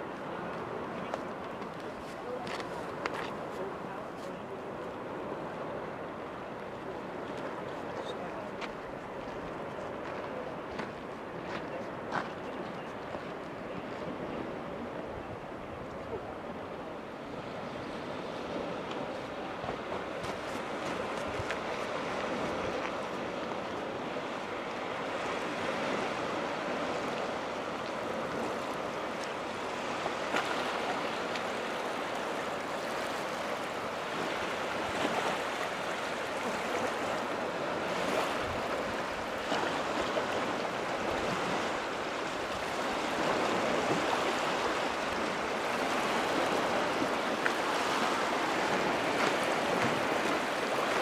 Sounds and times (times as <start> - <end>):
Boat, Water vehicle: 0.0 - 51.0.